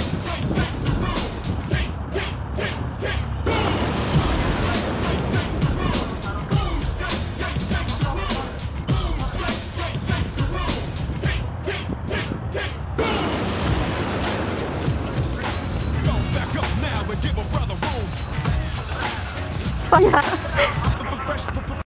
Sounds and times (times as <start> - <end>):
Music: 0.0 - 21.8.